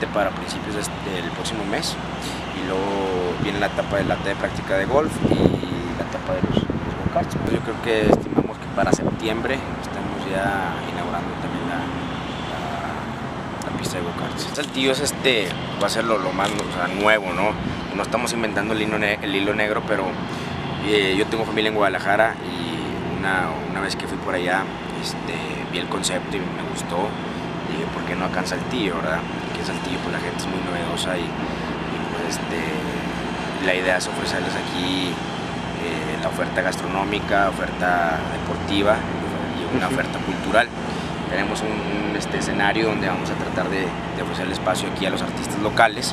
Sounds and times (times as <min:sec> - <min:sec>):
Speech: 0:00.0 - 0:20.2, 0:20.8 - 0:35.2, 0:35.8 - 0:46.1
Truck: 0:00.0 - 0:46.1.